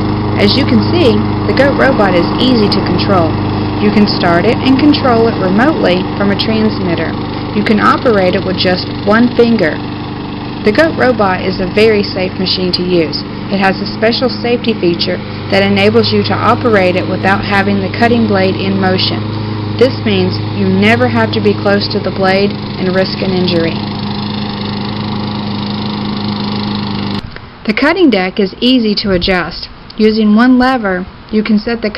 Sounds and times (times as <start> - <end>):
Speech: 0.4 - 9.8, 10.7 - 19.2, 19.8 - 23.8, 27.7 - 31.9.